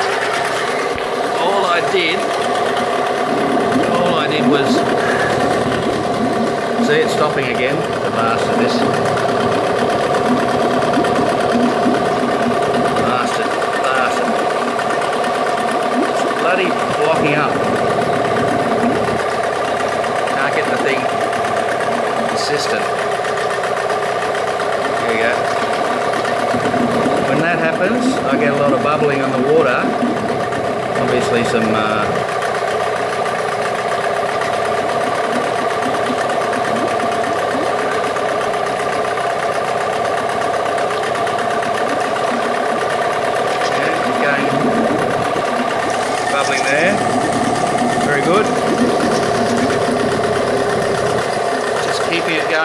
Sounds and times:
Speech: 0:01.4 - 0:02.3, 0:03.9 - 0:04.9, 0:06.8 - 0:08.9, 0:13.0 - 0:14.4, 0:16.2 - 0:17.6, 0:20.3 - 0:21.1, 0:22.2 - 0:22.9, 0:25.0 - 0:25.5, 0:27.3 - 0:30.0, 0:31.0 - 0:32.2, 0:43.6 - 0:44.6, 0:46.3 - 0:47.0, 0:48.0 - 0:48.6, 0:51.8 - 0:52.6.

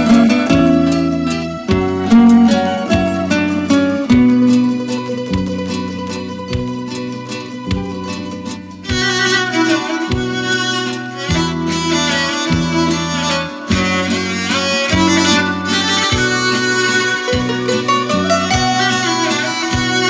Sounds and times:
Guitar: 0:00.0 - 0:20.0
Sad music: 0:00.0 - 0:20.0.

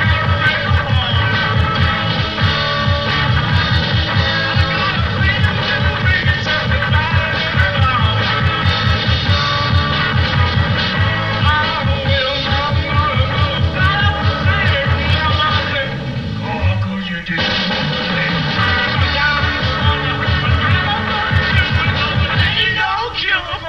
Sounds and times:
Funk: 0:00.0 - 0:23.6.

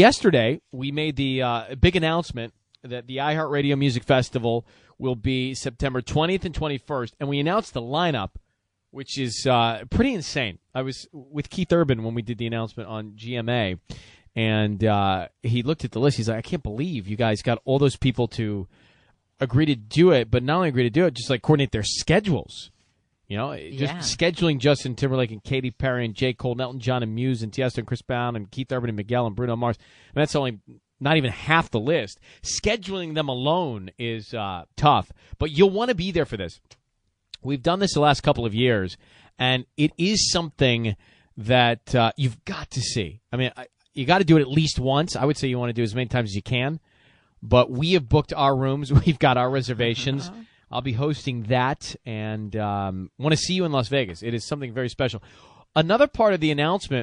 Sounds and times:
Speech: 0:00.0 - 0:08.4, 0:09.0 - 0:18.7, 0:19.4 - 0:22.7, 0:23.3 - 0:36.7, 0:37.4 - 0:46.8, 0:47.4 - 0:57.0.

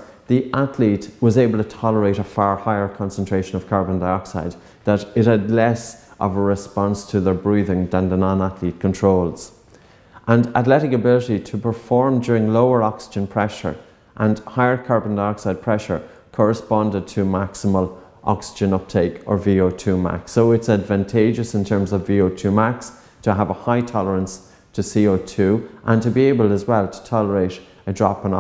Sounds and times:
Speech: 0:00.0 - 0:09.6, 0:10.2 - 0:28.4
Inside, small room: 0:00.0 - 0:28.4.

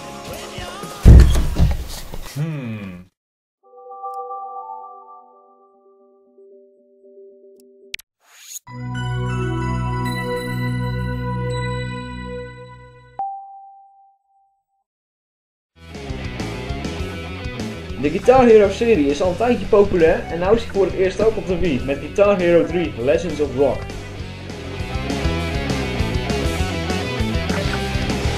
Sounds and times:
Speech: 0:02.4 - 0:03.1, 0:18.0 - 0:23.9.

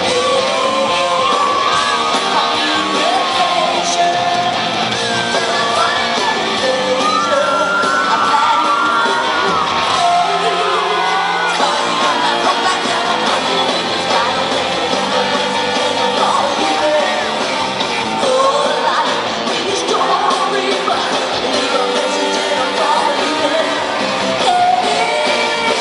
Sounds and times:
Inside, large room or hall: 0:00.0 - 0:25.8
Music: 0:00.0 - 0:25.8
Singing: 0:00.0 - 0:25.8
Whoop: 0:00.1 - 0:04.0, 0:05.0 - 0:12.3.

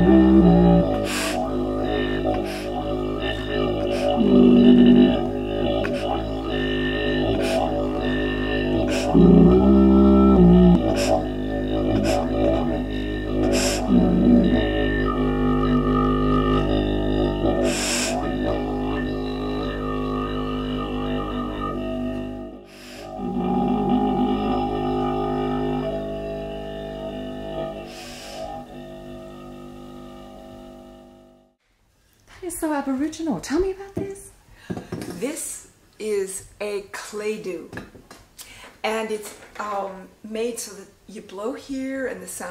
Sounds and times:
Didgeridoo: 0:00.0 - 0:31.6.

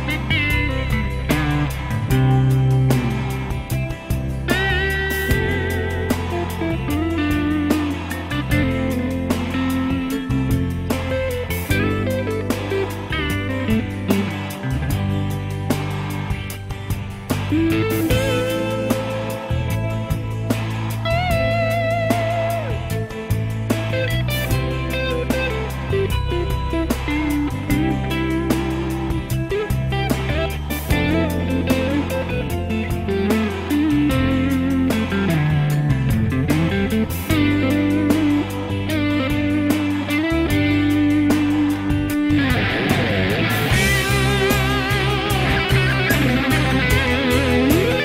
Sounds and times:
Music: 0:00.0 - 0:48.0.

